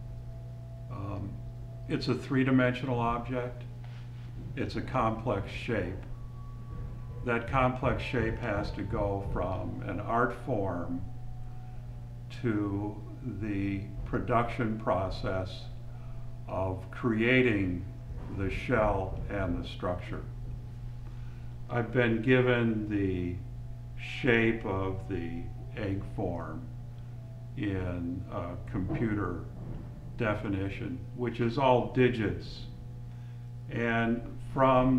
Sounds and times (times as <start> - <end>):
Speech: 0.9 - 3.7, 4.6 - 6.1, 7.2 - 11.1, 12.3 - 15.7, 16.5 - 20.3, 21.7 - 26.7, 27.6 - 29.5, 30.2 - 32.8, 33.7 - 34.9.